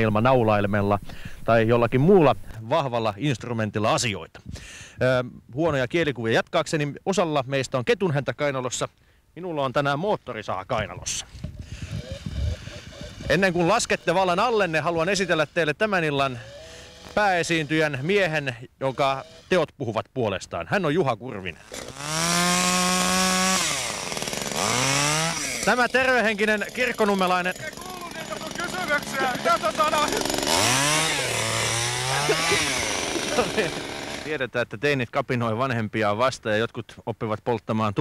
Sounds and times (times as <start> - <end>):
Speech: 0.0 - 4.3, 5.0 - 11.2, 13.3 - 16.4, 17.2 - 21.6, 25.7 - 30.3, 34.3 - 38.0
Chainsaw: 11.3 - 19.6, 21.5 - 34.4.